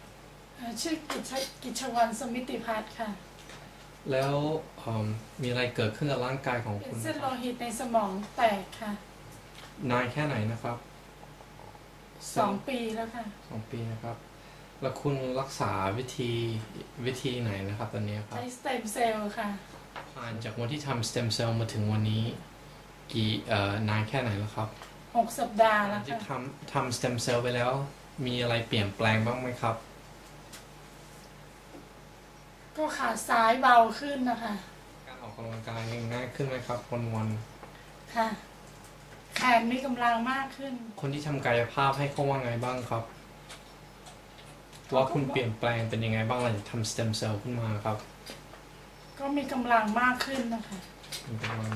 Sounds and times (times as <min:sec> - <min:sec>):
Speech: 0:00.6 - 0:03.2, 0:44.9 - 0:48.1.